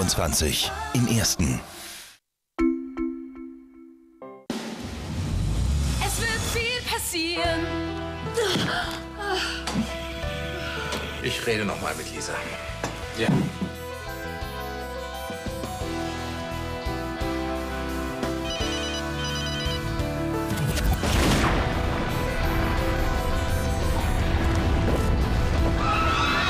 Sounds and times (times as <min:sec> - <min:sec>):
Music: 0:02.6 - 0:26.4.